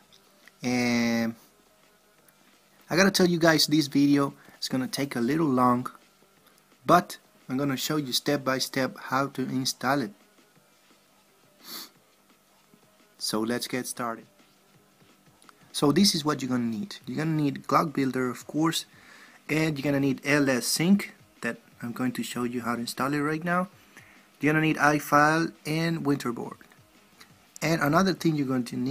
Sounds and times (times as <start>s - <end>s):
Speech: 0.6s - 1.4s, 2.9s - 6.0s, 6.9s - 10.2s, 13.2s - 14.3s, 15.7s - 18.9s, 19.5s - 23.8s, 24.4s - 26.6s, 27.6s - 28.9s.